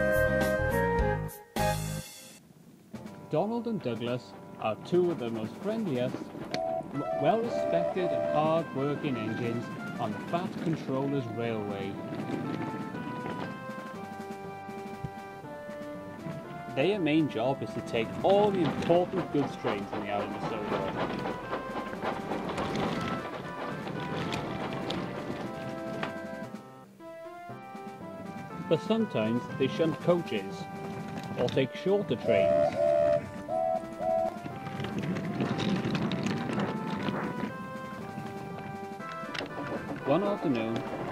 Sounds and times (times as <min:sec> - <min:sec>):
Music: 0:00.0 - 0:41.1
Speech: 0:03.3 - 0:06.3, 0:07.0 - 0:12.0, 0:16.8 - 0:21.0, 0:28.7 - 0:30.7, 0:31.4 - 0:32.8, 0:40.1 - 0:40.8.